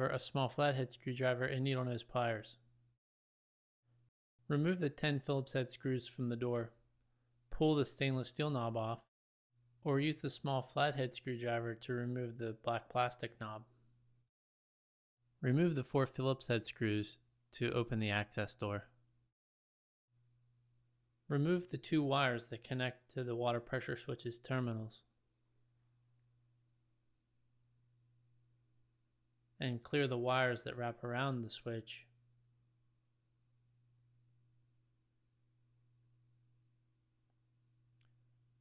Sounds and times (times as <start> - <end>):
Speech: 0.0 - 2.6, 4.5 - 6.8, 7.5 - 9.1, 9.8 - 13.8, 15.4 - 19.0, 21.3 - 25.1, 29.6 - 32.2.